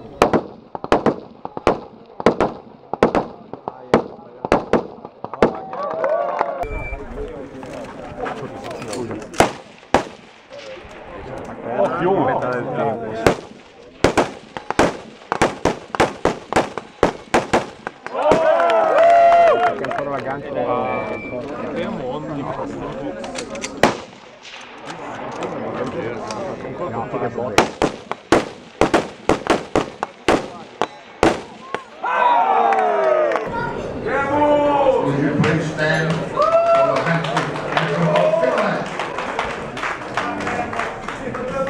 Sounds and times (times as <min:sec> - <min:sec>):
Outside, rural or natural: 0:00.0 - 0:33.8
Speech: 0:24.9 - 0:27.6, 0:40.0 - 0:41.7.